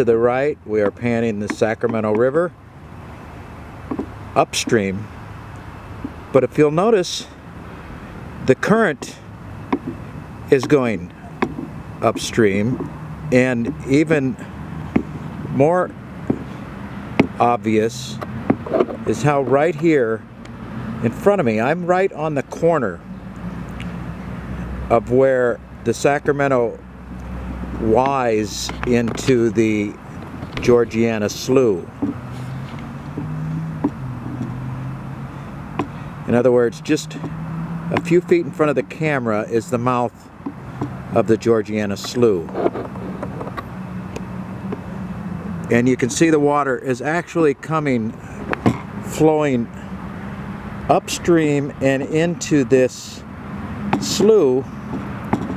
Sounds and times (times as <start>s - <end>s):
Speech: 0.0s - 2.5s, 4.4s - 5.1s, 6.3s - 7.4s, 8.4s - 9.2s, 10.5s - 11.2s, 12.0s - 14.4s, 15.5s - 15.9s, 17.4s - 18.2s, 19.1s - 20.2s, 21.0s - 23.0s, 24.9s - 26.8s, 27.8s - 30.0s, 30.6s - 31.9s, 36.3s - 37.2s, 37.9s - 40.2s, 41.2s - 42.5s, 45.7s - 48.2s, 49.1s - 49.8s, 50.9s - 53.2s, 54.0s - 54.7s
Outside, rural or natural: 0.0s - 55.5s.